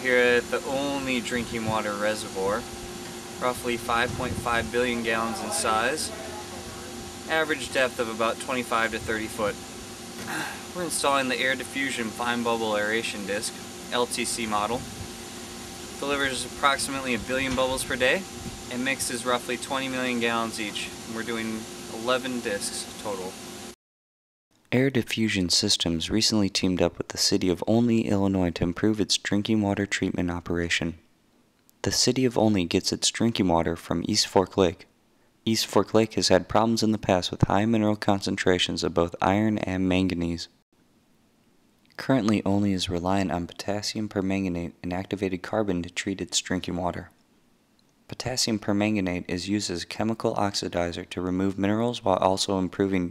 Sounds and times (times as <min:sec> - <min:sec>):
Speech: 0:00.0 - 0:02.6, 0:03.4 - 0:09.6, 0:10.3 - 0:14.8, 0:16.0 - 0:23.3, 0:24.7 - 0:31.0, 0:31.8 - 0:34.9, 0:35.5 - 0:40.6, 0:42.0 - 0:47.1, 0:48.1 - 0:53.1.